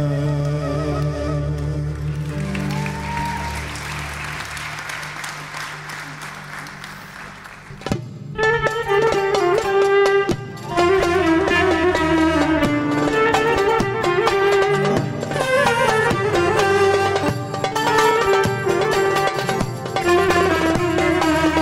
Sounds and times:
Orchestra: 0.0 - 21.6.

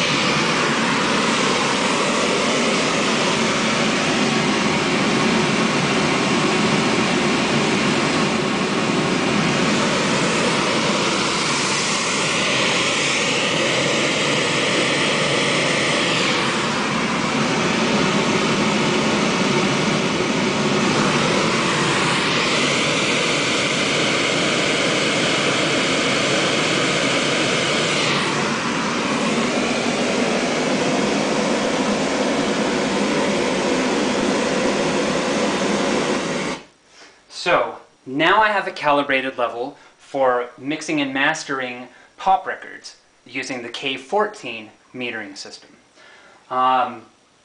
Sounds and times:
Fixed-wing aircraft, airplane: 0.0 - 36.6.

